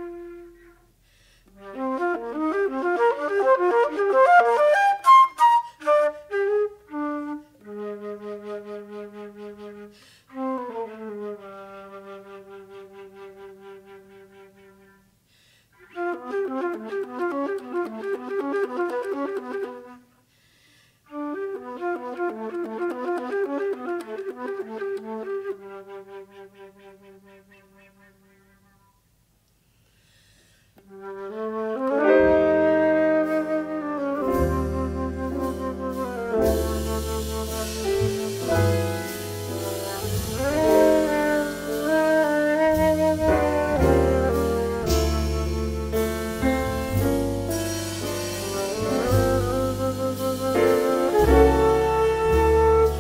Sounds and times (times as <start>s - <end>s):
Inside, large room or hall: 0.0s - 1.1s, 1.7s - 20.2s, 30.9s - 53.0s.